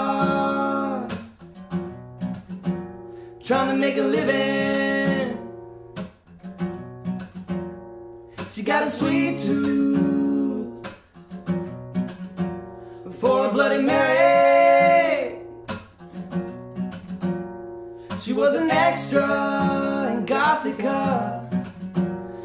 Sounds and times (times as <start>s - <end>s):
Music: 0.0s - 22.4s.